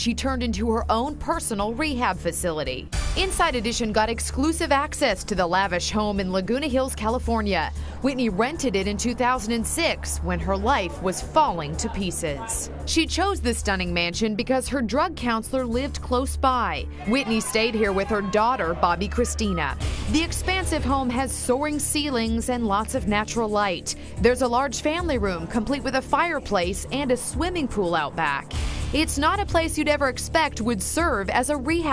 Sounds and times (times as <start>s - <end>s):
Speech: 0.0s - 28.4s, 29.0s - 31.9s.